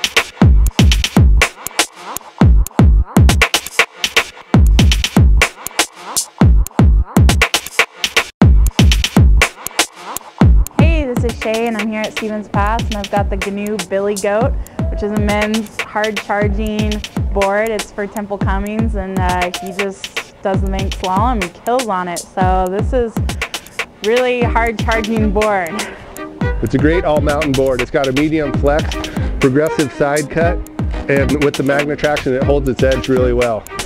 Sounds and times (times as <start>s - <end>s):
Music: 0.0s - 33.8s
Speech: 10.8s - 23.2s, 24.0s - 25.9s, 26.6s - 33.6s.